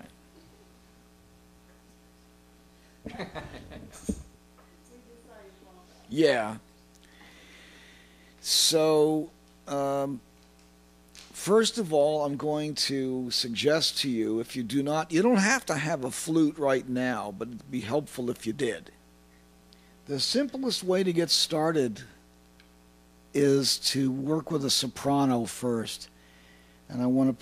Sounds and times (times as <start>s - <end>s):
Speech: 4.9s - 6.6s, 8.4s - 10.2s, 11.4s - 19.0s, 20.1s - 22.2s, 23.4s - 26.1s, 26.9s - 27.4s.